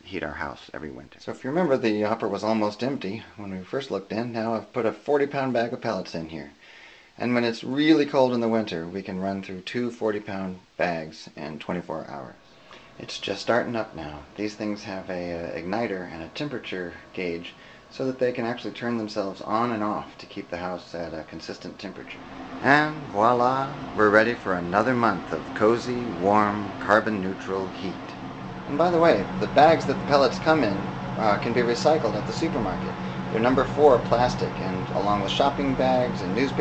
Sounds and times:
Speech: 0:00.0 - 0:06.6, 0:07.2 - 0:12.4, 0:13.0 - 0:36.6
Inside, small room: 0:00.0 - 0:36.6.

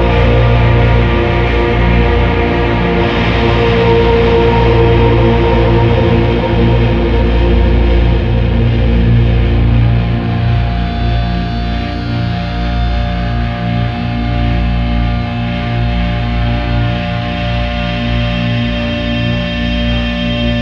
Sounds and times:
Music: 0:00.0 - 0:20.6.

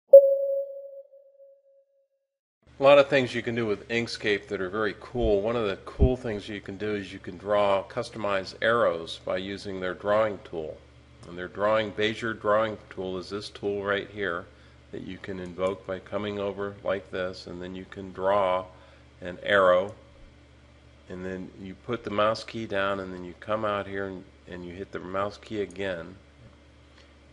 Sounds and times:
Inside, small room: 0:02.6 - 0:27.3
Speech: 0:02.8 - 0:20.0, 0:21.1 - 0:26.2.

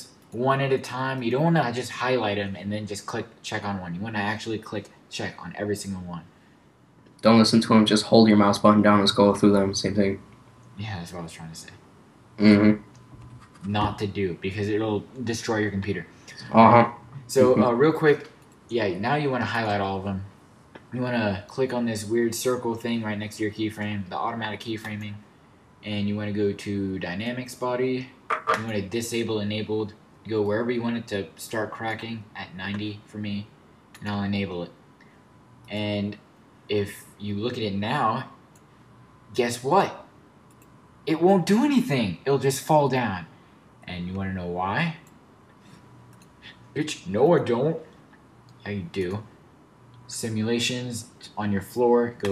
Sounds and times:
Speech: 0:00.0 - 0:06.3, 0:07.2 - 0:10.2, 0:10.8 - 0:11.8, 0:12.4 - 0:12.8, 0:13.6 - 0:20.3, 0:20.9 - 0:34.8, 0:35.7 - 0:38.4, 0:39.3 - 0:40.1, 0:41.1 - 0:45.1, 0:46.8 - 0:47.9, 0:48.6 - 0:49.3, 0:50.1 - 0:52.3.

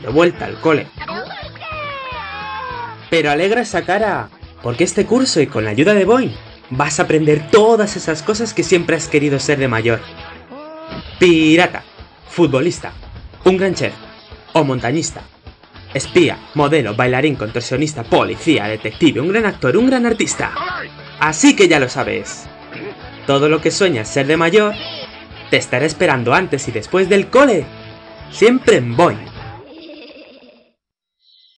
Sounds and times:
Speech: 0:00.0 - 0:01.9, 0:03.1 - 0:10.1, 0:10.9 - 0:14.0, 0:14.6 - 0:15.3, 0:16.0 - 0:27.7, 0:28.3 - 0:29.4
Music: 0:00.0 - 0:30.7.

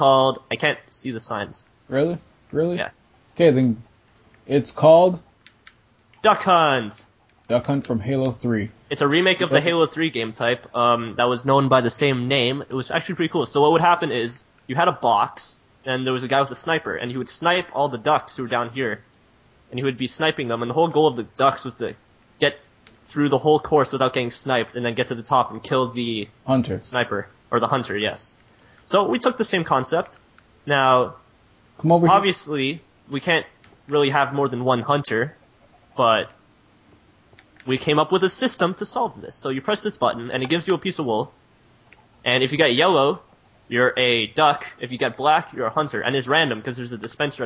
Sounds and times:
Speech: 0:00.0 - 0:03.9, 0:04.5 - 0:05.2, 0:06.2 - 0:19.0, 0:19.7 - 0:31.2, 0:31.8 - 0:35.4, 0:36.0 - 0:36.4, 0:37.7 - 0:41.4, 0:42.2 - 0:47.4.

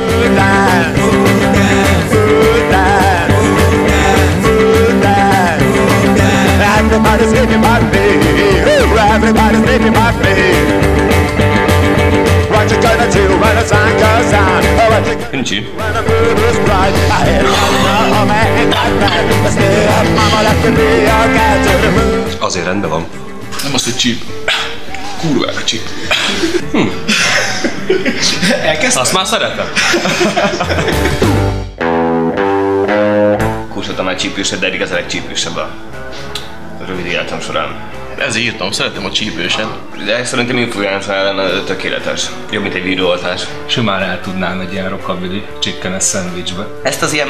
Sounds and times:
Music: 0:00.0 - 0:47.2.

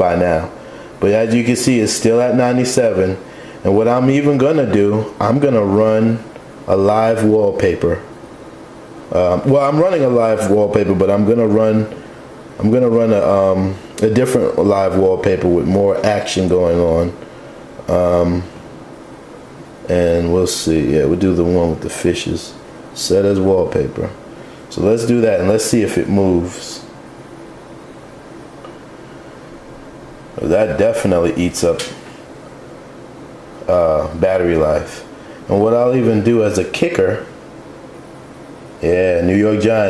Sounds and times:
Speech: 0:00.0 - 0:08.1, 0:09.1 - 0:12.0, 0:12.6 - 0:17.2, 0:17.9 - 0:18.6, 0:19.8 - 0:27.0, 0:30.4 - 0:32.0, 0:33.6 - 0:37.4, 0:38.8 - 0:39.9.

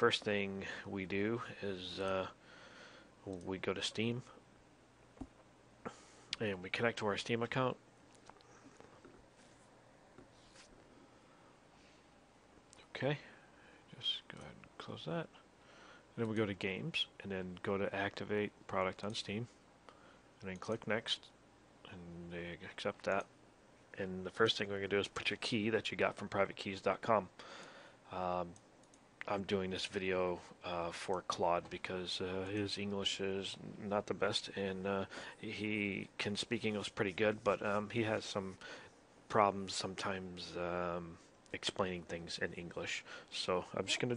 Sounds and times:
Speech: 0:00.0 - 0:02.4, 0:03.2 - 0:04.4, 0:06.4 - 0:07.8, 0:12.8 - 0:15.4, 0:16.2 - 0:19.6, 0:20.4 - 0:23.3, 0:24.0 - 0:27.3, 0:28.1 - 0:28.6, 0:29.2 - 0:38.6, 0:39.3 - 0:44.1.

